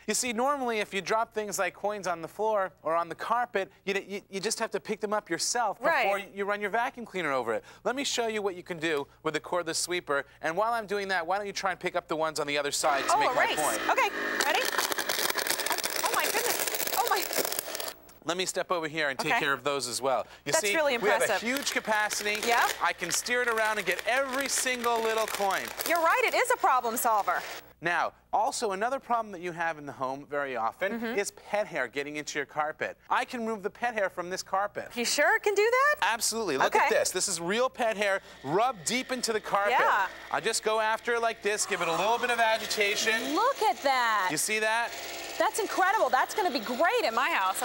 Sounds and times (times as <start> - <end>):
Speech: 0.1 - 14.6, 18.2 - 25.5, 36.1 - 44.9.